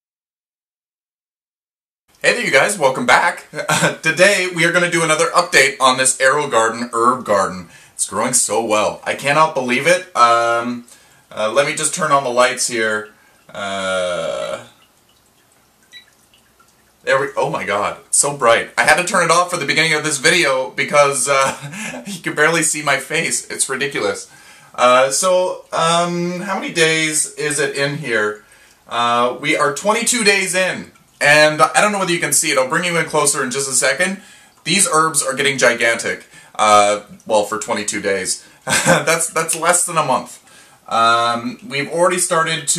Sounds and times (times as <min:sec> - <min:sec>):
Inside, small room: 0:02.1 - 0:42.7
Speech: 0:02.2 - 0:14.7, 0:17.0 - 0:42.7.